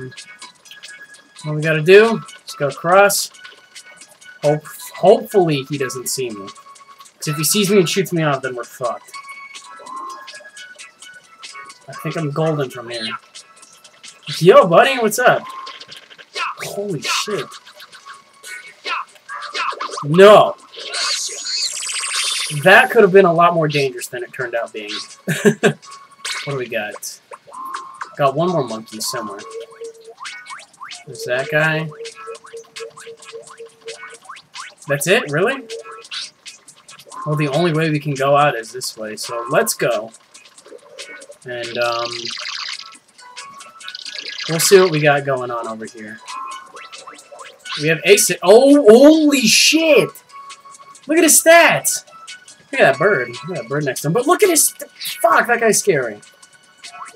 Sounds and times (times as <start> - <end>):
Music: 0.0 - 57.1
Speech: 1.4 - 3.3, 4.4 - 6.5, 7.2 - 9.0, 11.9 - 13.2, 14.3 - 15.4, 16.6 - 17.5, 20.1 - 20.6, 22.5 - 25.0, 26.5 - 27.2, 28.2 - 29.5, 31.1 - 31.9, 34.9 - 35.6, 37.2 - 40.1, 41.5 - 42.3, 44.5 - 46.2, 47.8 - 50.2, 51.1 - 52.0, 52.8 - 56.2.